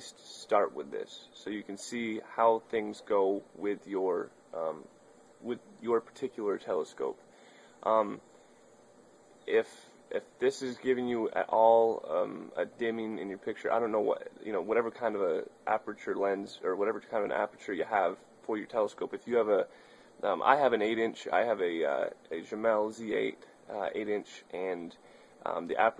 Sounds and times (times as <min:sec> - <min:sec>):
Speech: 0:00.0 - 0:07.2, 0:07.8 - 0:08.2, 0:09.5 - 0:25.9.